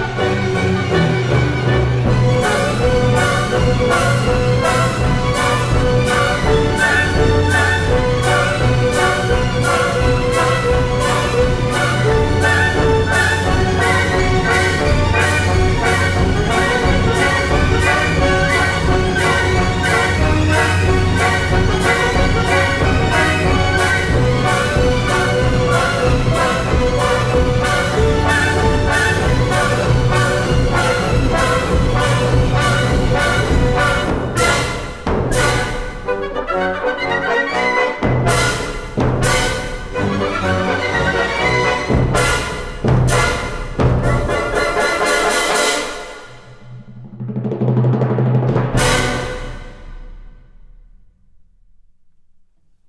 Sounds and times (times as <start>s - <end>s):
Timpani: 0.0s - 52.2s.